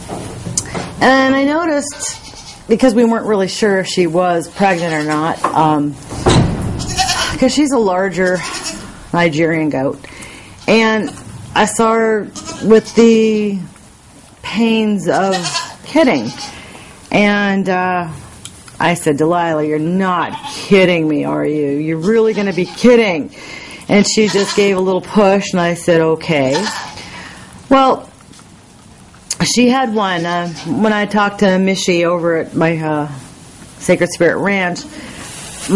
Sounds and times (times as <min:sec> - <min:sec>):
Speech: 0:01.0 - 0:06.0, 0:07.4 - 0:08.5, 0:09.2 - 0:10.0, 0:10.7 - 0:13.7, 0:14.5 - 0:16.4, 0:17.1 - 0:18.2, 0:18.8 - 0:26.8, 0:27.7 - 0:28.1, 0:29.3 - 0:34.9
Bleat: 0:01.9 - 0:02.7, 0:06.8 - 0:07.4, 0:08.3 - 0:08.9, 0:12.3 - 0:13.1, 0:15.2 - 0:16.6, 0:20.3 - 0:20.7, 0:22.2 - 0:23.0, 0:24.2 - 0:24.8, 0:26.5 - 0:27.0, 0:30.4 - 0:30.8.